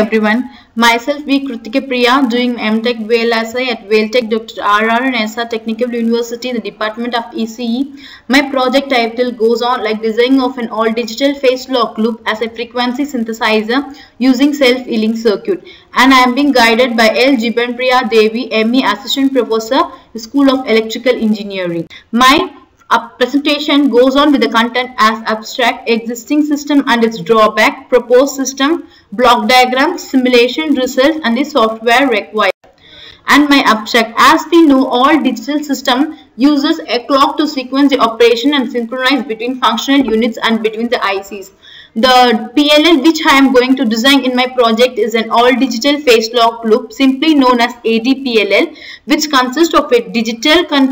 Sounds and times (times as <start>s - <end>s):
Speech: 0.0s - 32.6s, 33.2s - 50.9s.